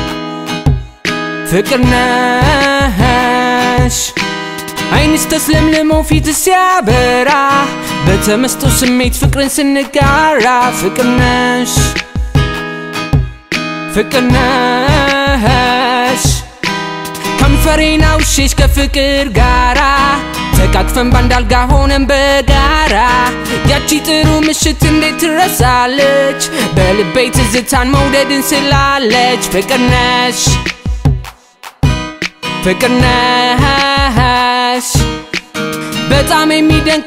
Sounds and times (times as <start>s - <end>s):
Blues: 0.0s - 37.0s
Pop music: 0.0s - 37.0s.